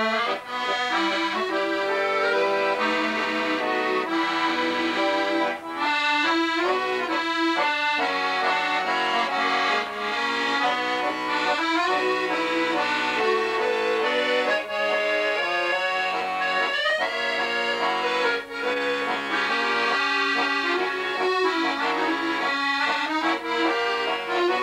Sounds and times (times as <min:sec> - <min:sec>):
Accordion: 0:00.0 - 0:24.6.